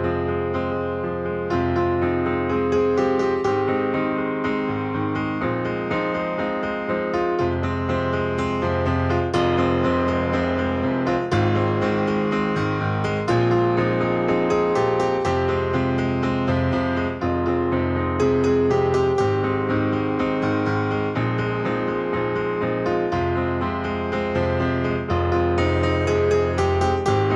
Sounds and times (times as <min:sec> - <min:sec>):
Music: 0:00.0 - 0:27.3.